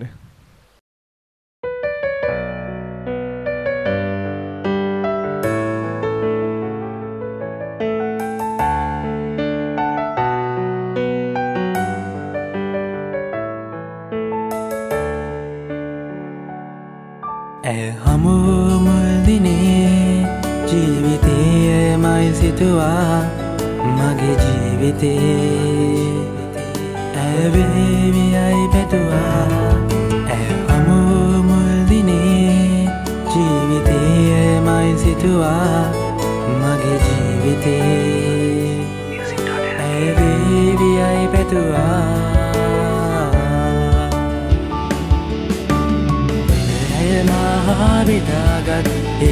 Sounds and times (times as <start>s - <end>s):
Music: 1.6s - 49.3s.